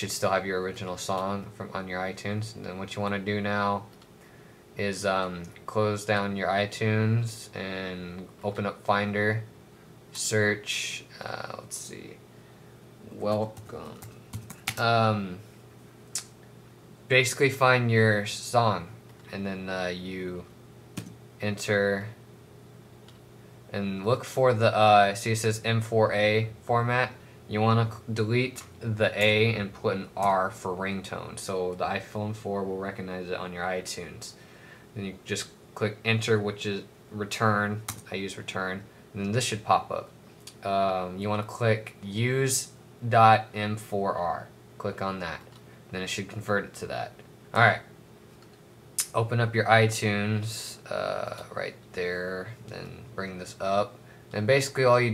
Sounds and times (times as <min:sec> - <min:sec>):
Speech: 0:00.0 - 0:03.9, 0:04.8 - 0:09.5, 0:10.2 - 0:12.2, 0:13.1 - 0:14.1, 0:14.7 - 0:15.4, 0:17.1 - 0:20.5, 0:21.4 - 0:22.2, 0:23.7 - 0:34.4, 0:35.0 - 0:47.9, 0:49.0 - 0:55.1.